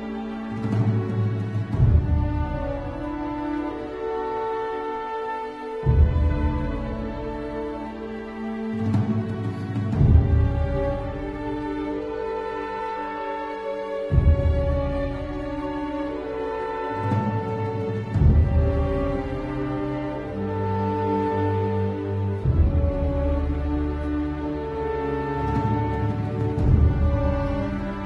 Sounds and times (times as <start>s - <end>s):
Music: 0.0s - 28.0s.